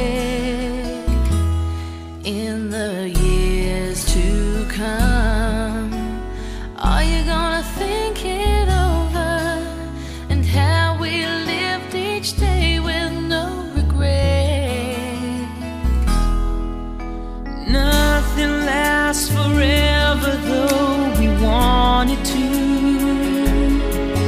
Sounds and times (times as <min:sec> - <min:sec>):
Music: 0:00.0 - 0:24.2.